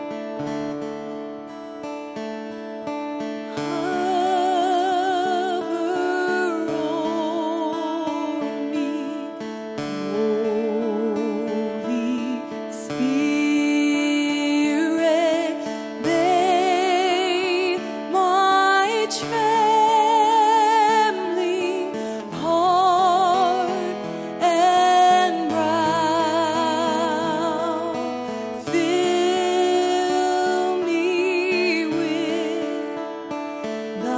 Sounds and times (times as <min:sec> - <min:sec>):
Music: 0:00.0 - 0:34.1.